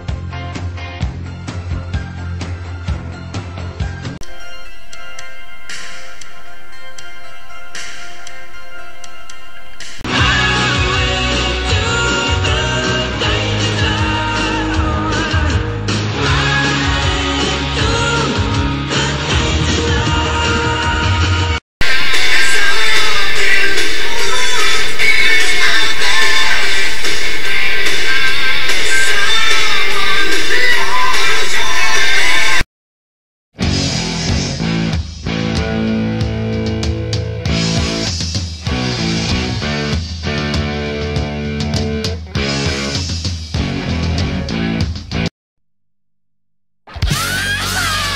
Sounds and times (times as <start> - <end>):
Music: 0.0 - 32.7, 33.6 - 45.3, 46.9 - 48.1.